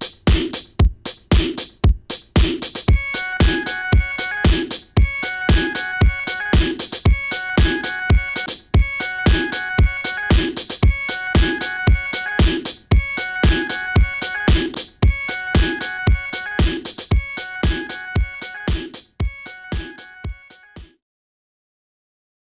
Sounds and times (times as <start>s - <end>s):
Music: 0.0s - 21.0s.